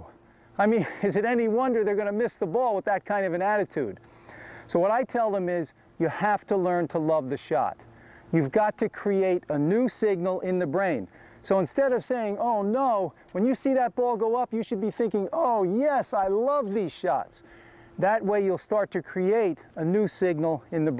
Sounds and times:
Speech: 0.0s - 4.0s, 4.7s - 17.4s, 18.0s - 20.9s.

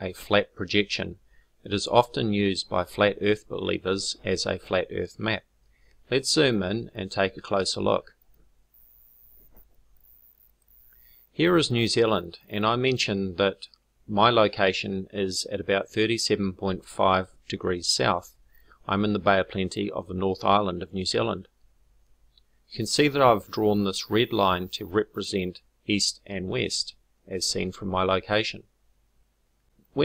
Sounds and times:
Speech: 0.0s - 5.5s, 6.1s - 8.1s, 11.4s - 18.3s, 18.9s - 21.5s, 22.8s - 28.7s.

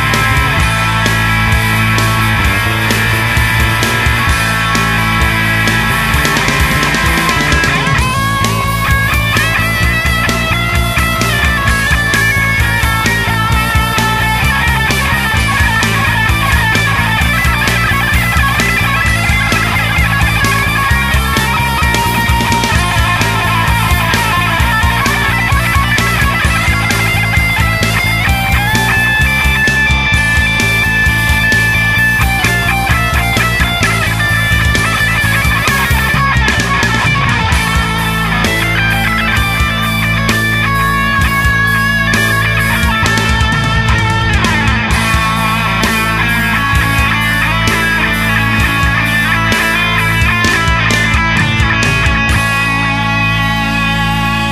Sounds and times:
Progressive rock: 0.0s - 54.5s.

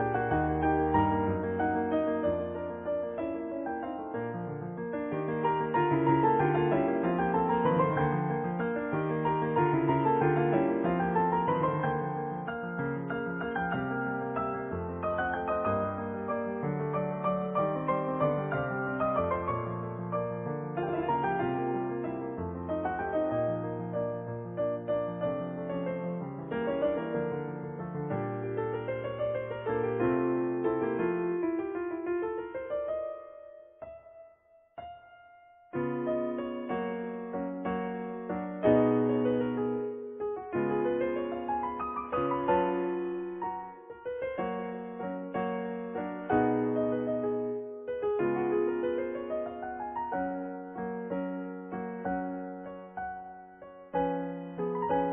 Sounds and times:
Music: 0.0s - 55.1s.

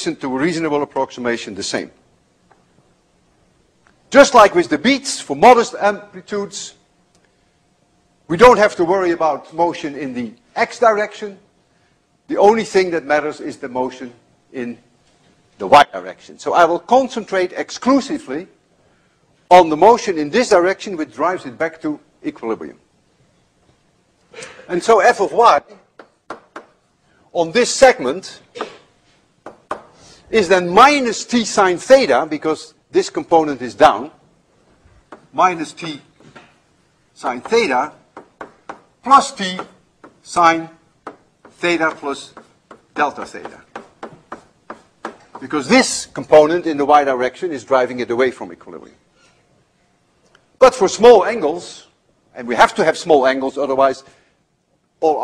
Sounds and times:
Speech: 0.0s - 2.0s, 4.1s - 6.8s, 8.3s - 11.5s, 12.3s - 14.9s, 15.6s - 18.6s, 19.5s - 22.8s, 24.7s - 25.9s, 27.3s - 28.5s, 30.3s - 34.2s, 35.4s - 36.1s, 37.2s - 38.0s, 39.0s - 40.8s, 41.6s - 42.4s, 43.0s - 43.7s, 45.4s - 49.0s, 50.6s - 54.1s, 55.0s - 55.2s.

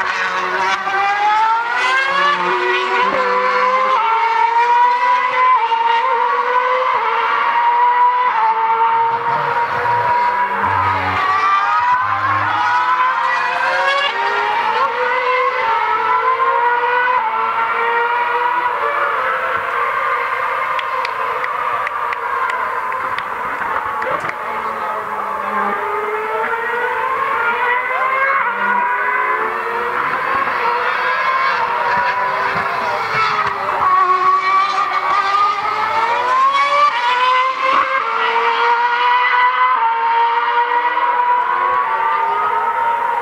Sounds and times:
Accelerating, revving, vroom: 0.0s - 43.2s
Car: 0.0s - 43.2s.

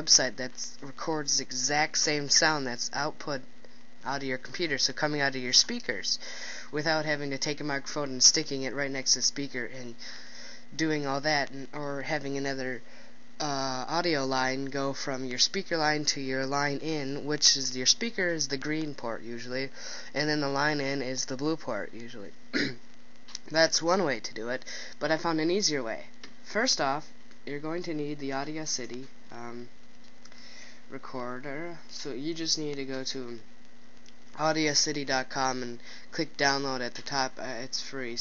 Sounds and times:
Speech: 0.0s - 10.0s, 10.8s - 12.8s, 13.4s - 22.8s, 23.4s - 29.7s, 30.9s - 33.4s, 34.4s - 38.2s.

